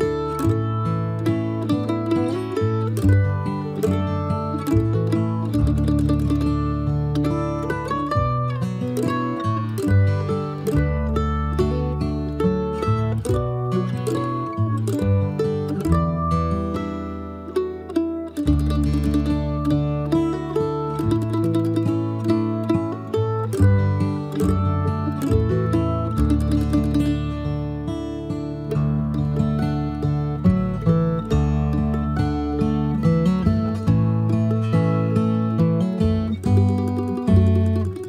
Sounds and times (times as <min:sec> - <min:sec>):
Plucked string instrument: 0:00.0 - 0:38.0.